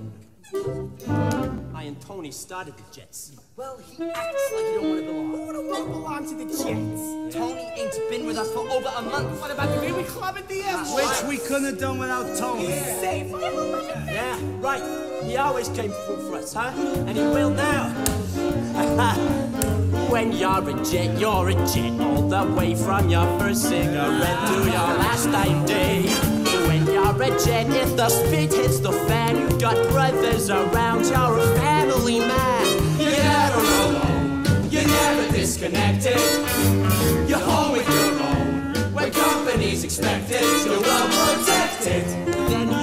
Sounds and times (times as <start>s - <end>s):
Jazz: 0.0s - 1.8s, 3.9s - 42.8s.